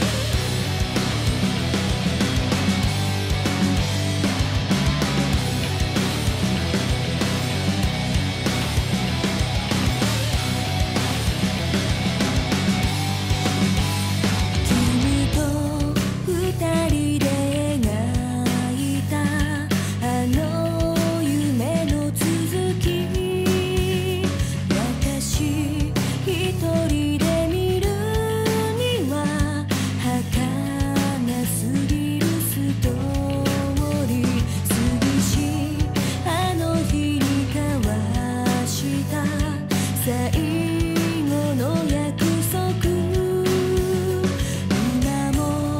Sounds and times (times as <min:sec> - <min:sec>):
Music: 0:00.0 - 0:45.7.